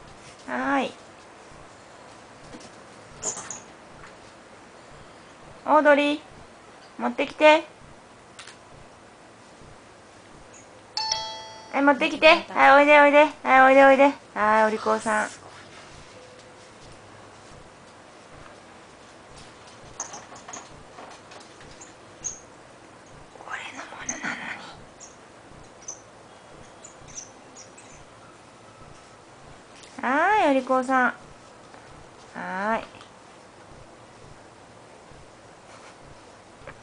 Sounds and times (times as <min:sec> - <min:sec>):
Speech: 0:00.4 - 0:01.0, 0:05.6 - 0:06.3, 0:07.0 - 0:07.7, 0:11.8 - 0:15.4, 0:30.0 - 0:31.2, 0:32.3 - 0:33.0.